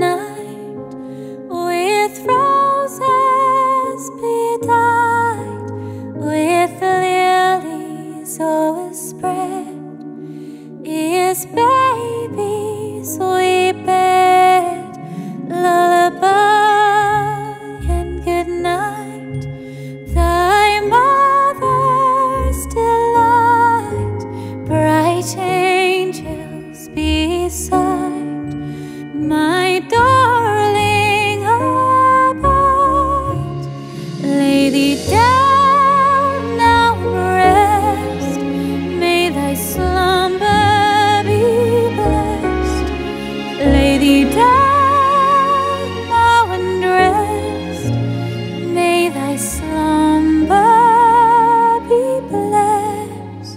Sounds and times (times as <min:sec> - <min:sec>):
Lullaby: 0:00.0 - 0:53.5.